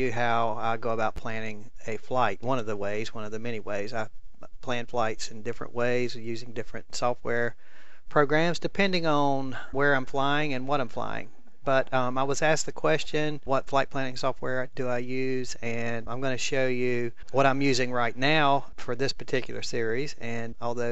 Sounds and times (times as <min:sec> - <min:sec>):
Speech: 0:00.0 - 0:20.9.